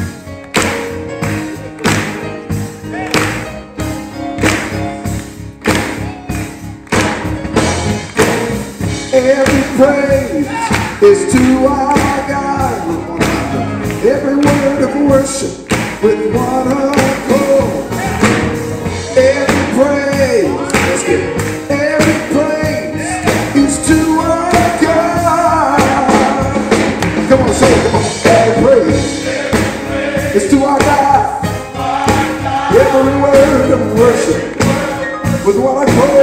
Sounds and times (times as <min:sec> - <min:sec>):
Jazz: 0:00.0 - 0:36.2.